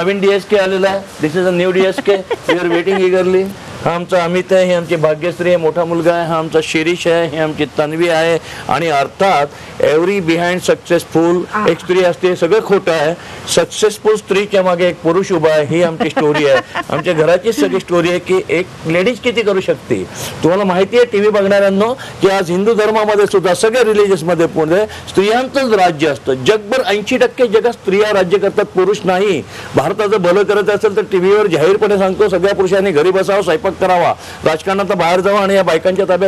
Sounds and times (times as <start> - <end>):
Speech: 0.0 - 36.2.